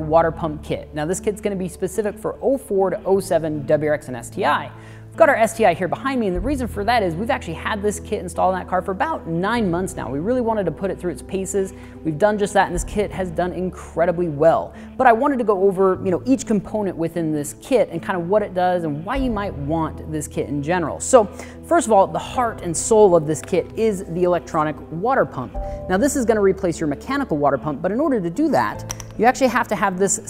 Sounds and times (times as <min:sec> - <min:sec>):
Music: 0:00.0 - 0:30.2
Speech: 0:00.0 - 0:30.2.